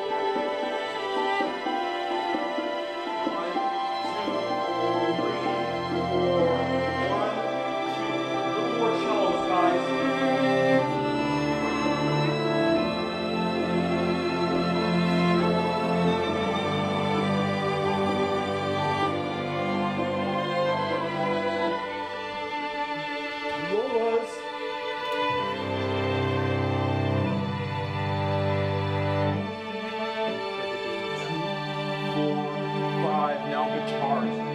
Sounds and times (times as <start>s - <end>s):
Orchestra: 0.0s - 34.5s.